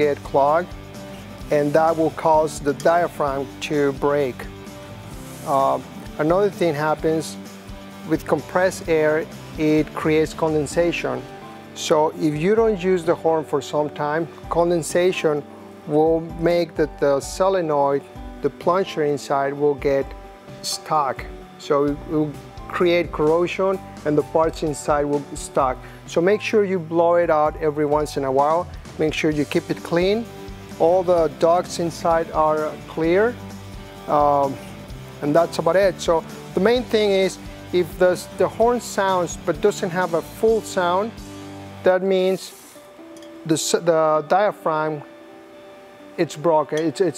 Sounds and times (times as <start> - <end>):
Speech: 0.0 - 0.7, 1.5 - 4.5, 5.4 - 7.4, 8.1 - 33.4, 34.1 - 34.6, 35.2 - 41.1, 41.8 - 42.6, 43.5 - 45.1, 46.2 - 47.1
Music: 0.0 - 47.1.